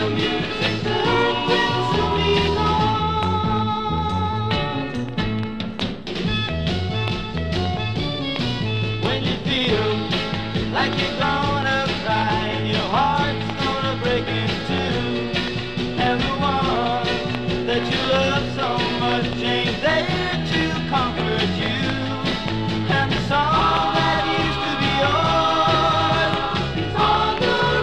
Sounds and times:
Rhythm and blues: 0.0s - 27.8s.

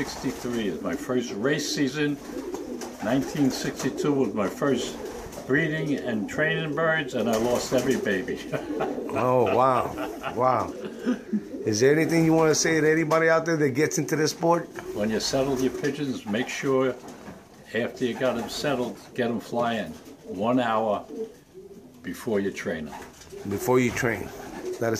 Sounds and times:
Speech: 0.0s - 2.2s, 3.0s - 8.5s, 9.1s - 10.8s, 11.6s - 17.0s, 17.7s - 21.1s, 22.0s - 24.9s
Pigeon, dove: 0.0s - 12.4s, 13.9s - 24.9s
Inside, small room: 0.0s - 24.9s.

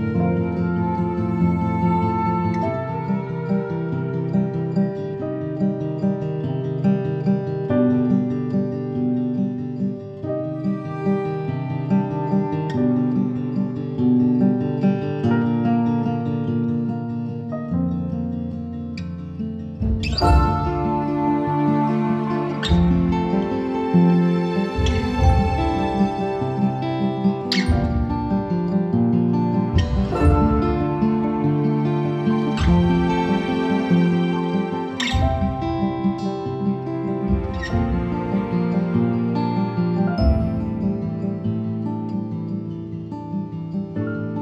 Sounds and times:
Music: 0.0s - 44.4s.

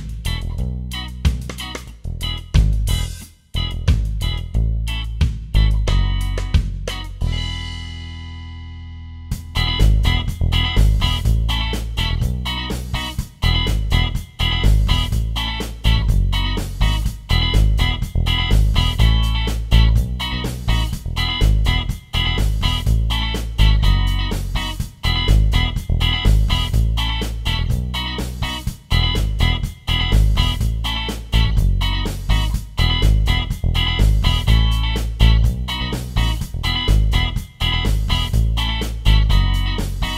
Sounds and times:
Music: 0.0s - 40.1s.

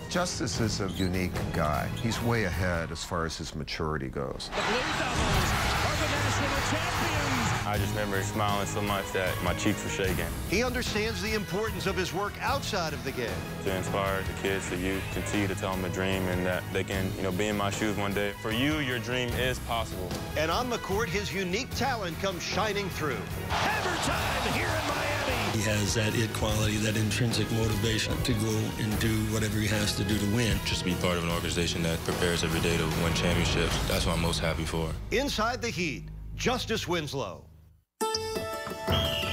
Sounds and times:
Music: 0.0s - 3.4s, 4.6s - 36.9s, 38.0s - 39.3s
Speech: 7.7s - 37.4s.

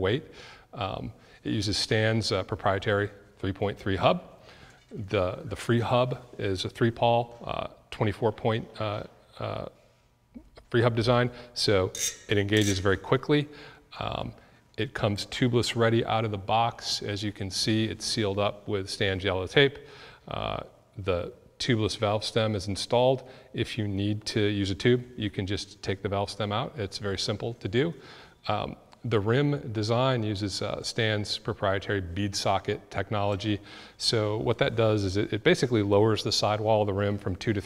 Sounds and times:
Speech: 0.0s - 4.3s, 4.9s - 9.8s, 10.4s - 37.6s.

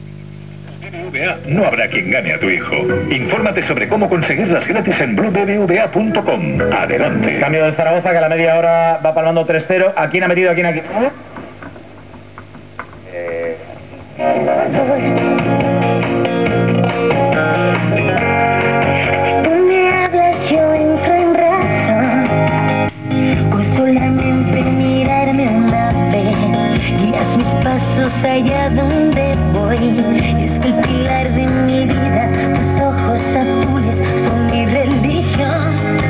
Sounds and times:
Music: 0.8s - 8.1s, 14.1s - 36.1s.

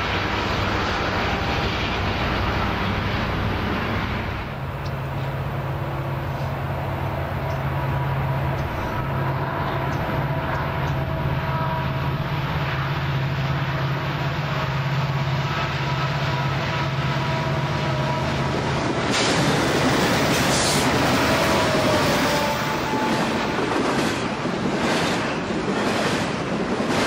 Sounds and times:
Railroad car, train wagon: 0.0s - 27.0s
Train: 0.0s - 27.0s.

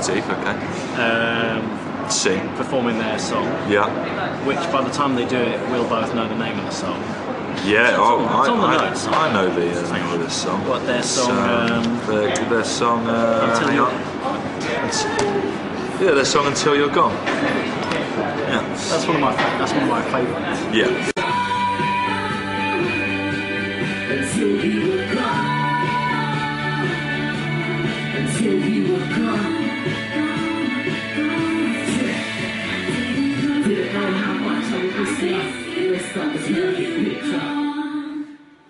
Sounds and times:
Speech: 0.0s - 17.2s, 17.9s - 21.2s
Music: 20.5s - 38.7s.

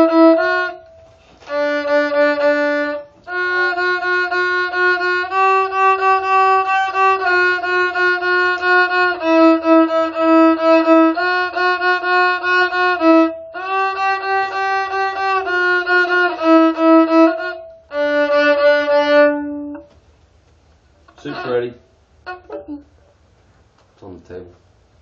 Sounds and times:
Violin, fiddle: 0.0s - 20.0s, 21.1s - 22.9s.

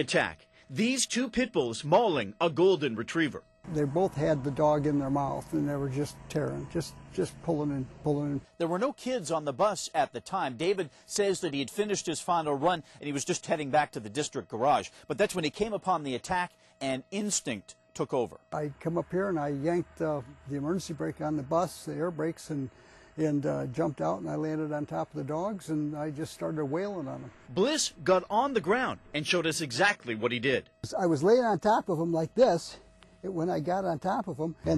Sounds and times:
Speech: 0.0s - 34.7s.

